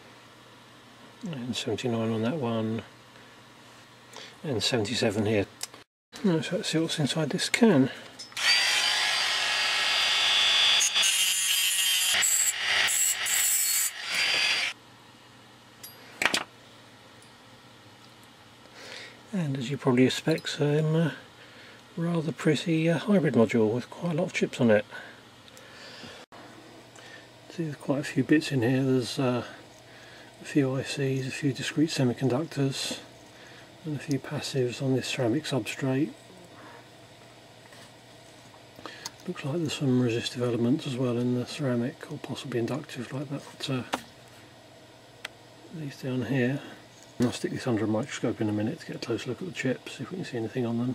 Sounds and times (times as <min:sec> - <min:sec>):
Speech: 0:01.2 - 0:02.9, 0:04.4 - 0:05.6, 0:06.2 - 0:08.0, 0:19.3 - 0:21.2, 0:22.0 - 0:25.1, 0:27.5 - 0:29.6, 0:30.4 - 0:33.1, 0:33.8 - 0:36.8, 0:39.2 - 0:44.0, 0:45.7 - 0:50.9.